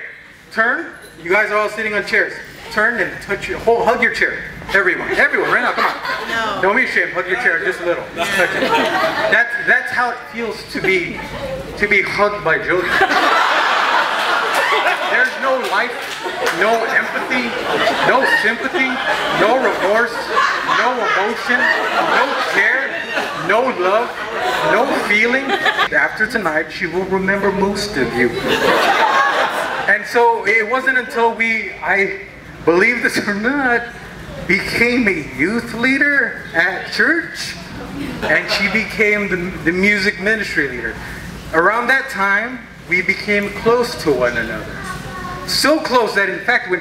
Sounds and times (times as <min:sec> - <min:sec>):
Laughter: 0:05.0 - 0:06.5, 0:08.2 - 0:09.4, 0:12.8 - 0:25.9, 0:28.3 - 0:29.9, 0:37.8 - 0:38.9
Speech: 0:14.9 - 0:28.5, 0:29.9 - 0:46.8.